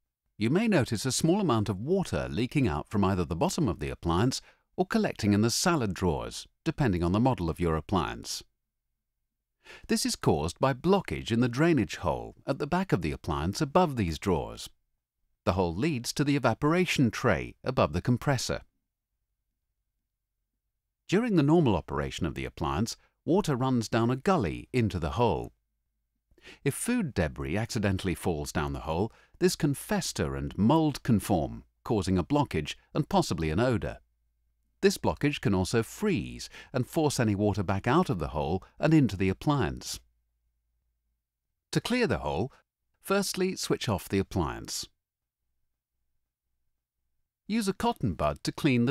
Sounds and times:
Speech: 0.4 - 8.5, 9.9 - 14.8, 15.5 - 18.7, 21.1 - 25.6, 26.6 - 34.0, 34.8 - 40.0, 41.8 - 45.0, 47.5 - 48.9.

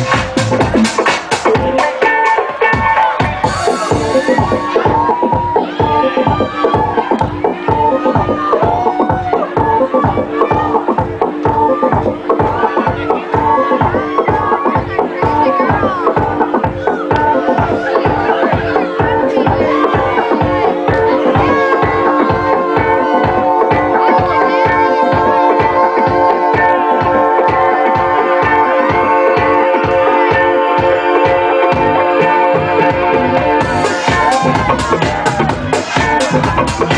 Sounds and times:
Music: 0.0 - 36.9.

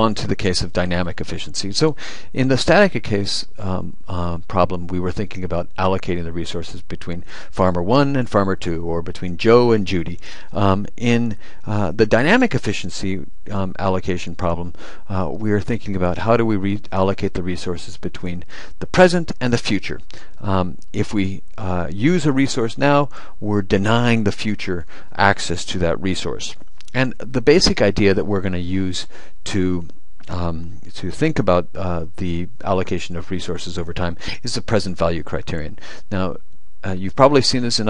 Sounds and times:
Speech: 0.0 - 37.9.

